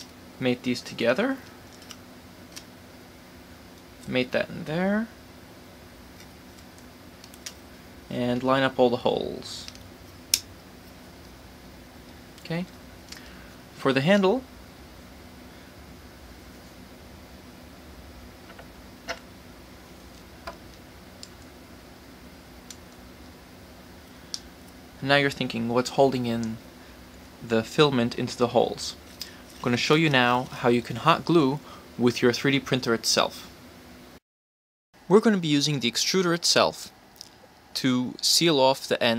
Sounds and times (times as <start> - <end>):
Speech: 0.4 - 1.5, 4.0 - 5.2, 8.1 - 9.8, 12.4 - 12.8, 13.8 - 14.5, 25.0 - 26.6, 27.4 - 29.0, 29.6 - 33.5, 35.1 - 37.0, 37.8 - 39.1.